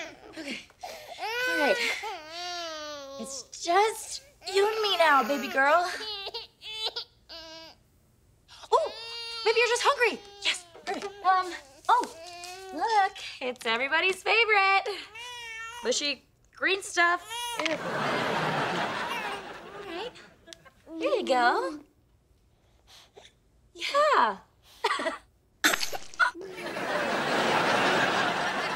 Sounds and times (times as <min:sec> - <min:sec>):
Speech: 0:03.2 - 0:06.1, 0:08.7 - 0:15.0, 0:15.8 - 0:17.3, 0:20.9 - 0:21.9, 0:23.8 - 0:24.5.